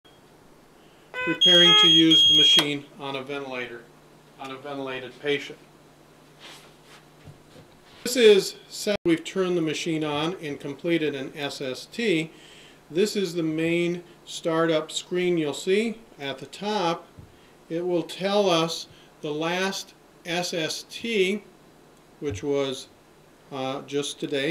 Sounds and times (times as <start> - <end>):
Speech: 1.3 - 5.6, 8.1 - 12.3, 12.9 - 17.1, 17.7 - 21.5, 22.2 - 22.9, 23.5 - 24.5.